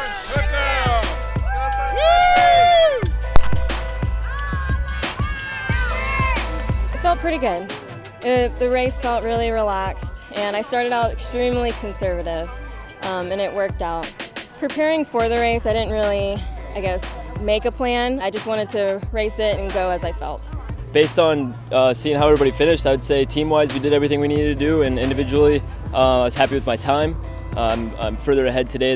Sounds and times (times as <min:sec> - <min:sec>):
Male speech, man speaking: 0:00.0 - 0:01.1, 0:20.9 - 0:28.9
Music: 0:00.0 - 0:28.9
Outside, urban or manmade: 0:00.0 - 0:28.9.